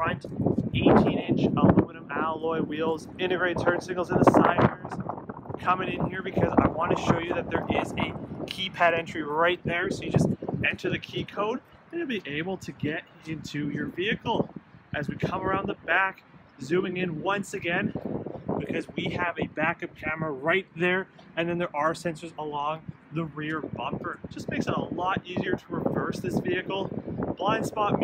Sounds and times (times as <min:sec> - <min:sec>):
Speech: 0:00.0 - 0:00.2, 0:00.8 - 0:05.0, 0:05.6 - 0:17.9, 0:18.6 - 0:28.0.